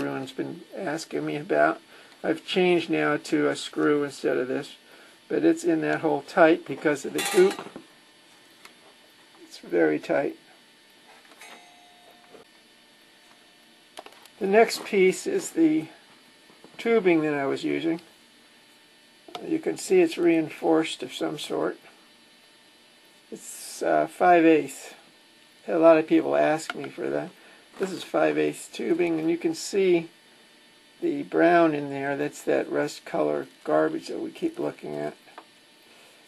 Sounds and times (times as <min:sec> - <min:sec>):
Speech: 0:00.0 - 0:07.7, 0:09.4 - 0:10.5, 0:14.4 - 0:16.0, 0:16.8 - 0:18.1, 0:19.3 - 0:22.0, 0:23.3 - 0:30.2, 0:31.0 - 0:35.3.